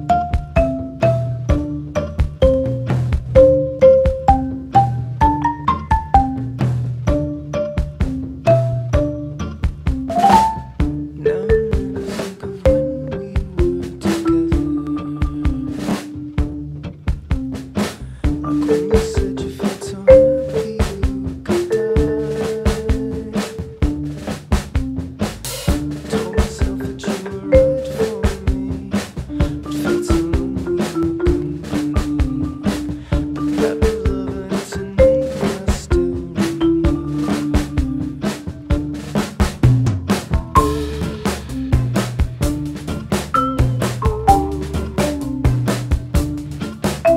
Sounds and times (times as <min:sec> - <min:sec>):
Percussion: 0:00.0 - 0:47.1.